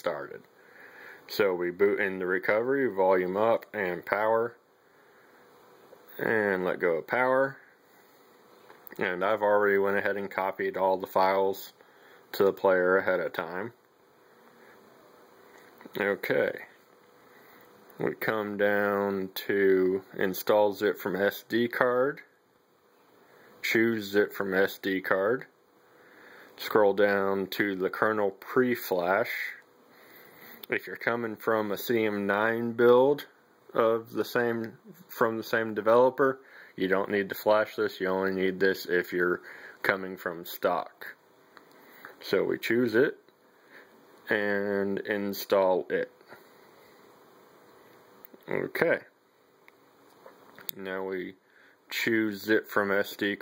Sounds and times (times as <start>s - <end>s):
Speech: 0.0s - 0.5s, 1.3s - 4.6s, 6.1s - 7.7s, 9.0s - 13.8s, 15.8s - 16.8s, 18.0s - 22.4s, 23.6s - 25.5s, 26.6s - 29.7s, 30.7s - 41.2s, 42.2s - 43.2s, 44.3s - 46.4s, 48.4s - 49.2s, 50.7s - 53.4s
Inside, small room: 0.0s - 53.4s.